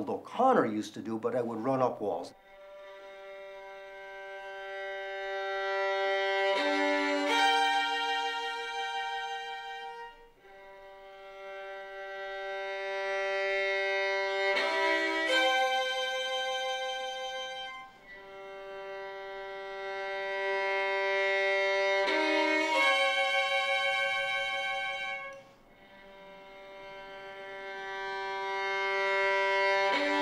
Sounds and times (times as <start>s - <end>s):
Violin, fiddle: 1.7s - 30.2s.